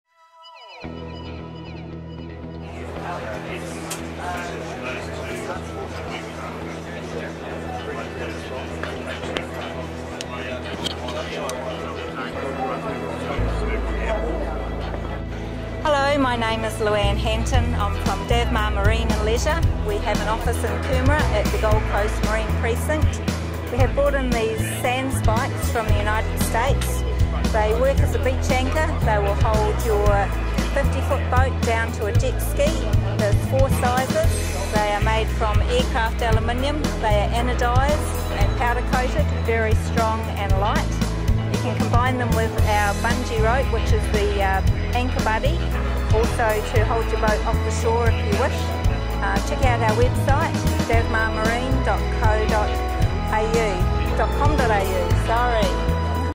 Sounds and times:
Music: 0.1s - 56.3s
Speech: 15.8s - 41.0s, 41.6s - 56.3s.

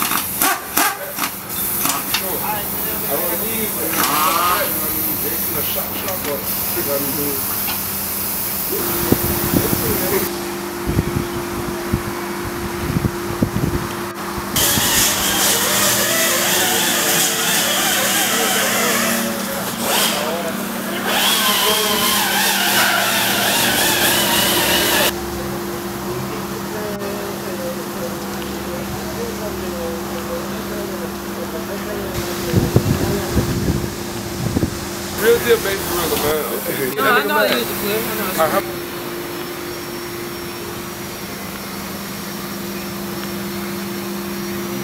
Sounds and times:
Speech: 2.0s - 7.6s, 8.7s - 10.3s, 16.0s - 23.0s, 25.0s - 33.7s, 35.2s - 38.9s.

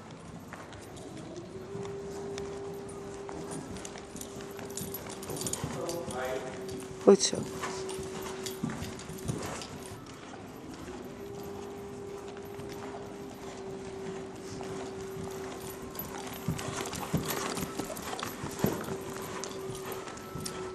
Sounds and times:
Clip-clop: 0.0s - 20.7s.

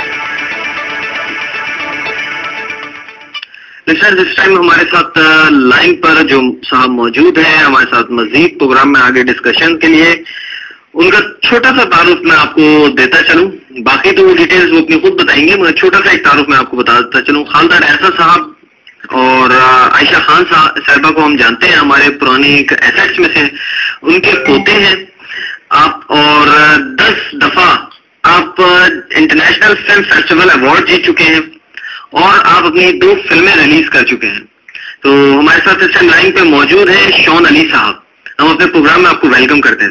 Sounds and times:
Music: 0.0s - 3.5s
Speech: 3.8s - 10.3s, 10.9s - 39.9s.

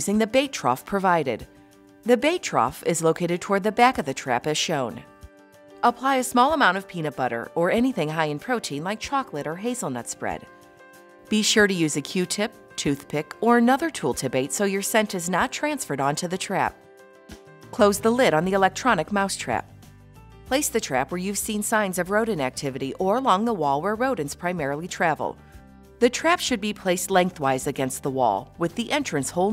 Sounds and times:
Speech: 0.0s - 1.4s, 2.1s - 5.0s, 5.8s - 10.5s, 11.3s - 16.8s, 17.8s - 19.7s, 20.5s - 25.4s, 26.0s - 29.5s
Music: 0.0s - 29.5s.

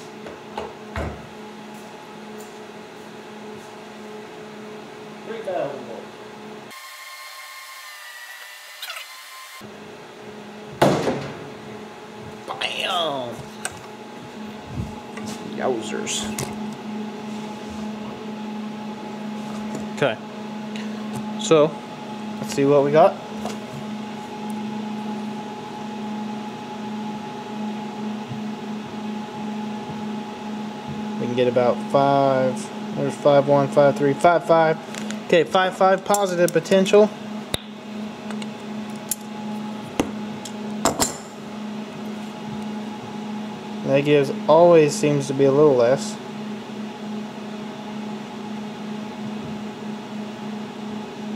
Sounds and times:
Speech: 5.2s - 6.1s, 15.4s - 16.4s, 22.4s - 23.2s, 31.2s - 37.2s, 43.8s - 46.2s.

